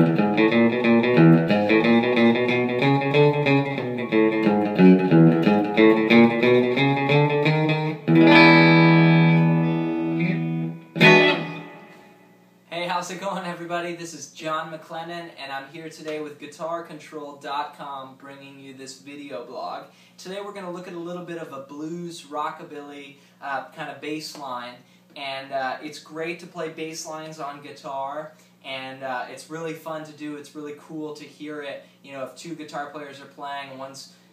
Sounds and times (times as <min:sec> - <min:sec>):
Speech: 0:12.7 - 0:34.2.